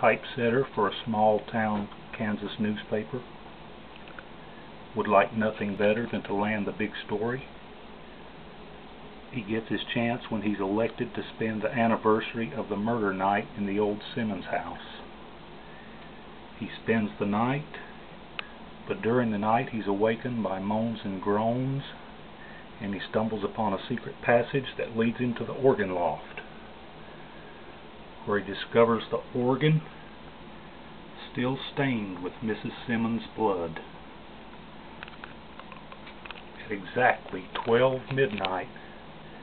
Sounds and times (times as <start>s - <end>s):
Speech: 0.0s - 3.4s, 4.9s - 7.6s, 9.3s - 15.1s, 16.6s - 18.0s, 18.8s - 22.1s, 22.8s - 26.5s, 28.2s - 30.0s, 31.2s - 34.0s, 36.6s - 38.9s.